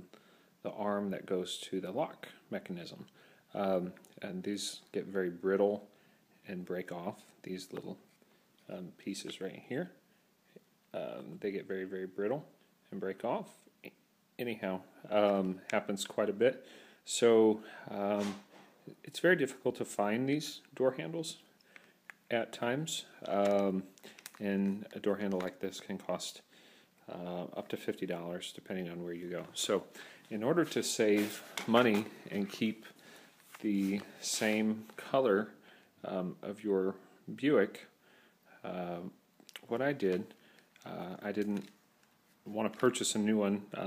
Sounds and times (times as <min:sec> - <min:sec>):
Speech: 0:00.6 - 0:08.0, 0:08.6 - 0:10.0, 0:10.9 - 0:21.5, 0:22.3 - 0:26.5, 0:27.1 - 0:33.0, 0:33.6 - 0:38.0, 0:38.6 - 0:41.8, 0:42.5 - 0:43.8.